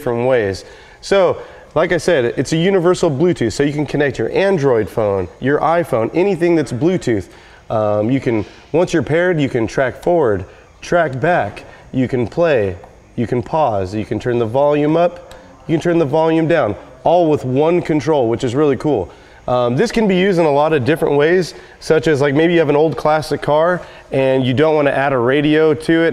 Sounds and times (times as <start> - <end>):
Speech: 0.0 - 26.1.